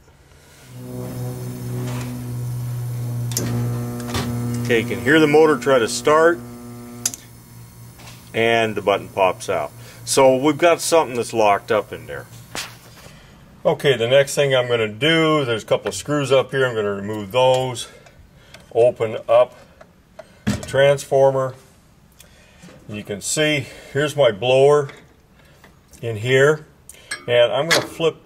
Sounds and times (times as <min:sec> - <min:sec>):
Speech: 0:04.7 - 0:06.4, 0:08.3 - 0:12.3, 0:13.6 - 0:18.0, 0:18.7 - 0:19.6, 0:20.6 - 0:21.7, 0:22.9 - 0:25.0, 0:26.0 - 0:26.7, 0:27.3 - 0:28.2.